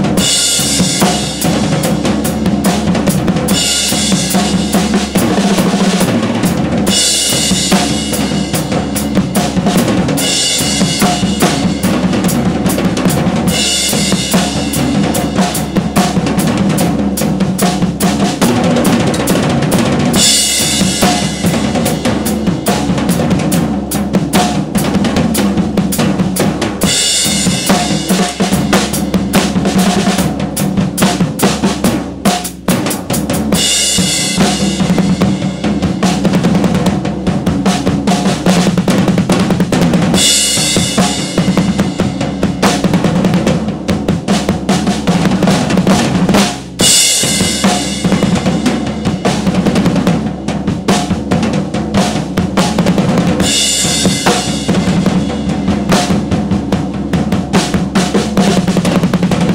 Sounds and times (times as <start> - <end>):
Bass drum: 0.0 - 59.5
Drum kit: 0.0 - 59.5.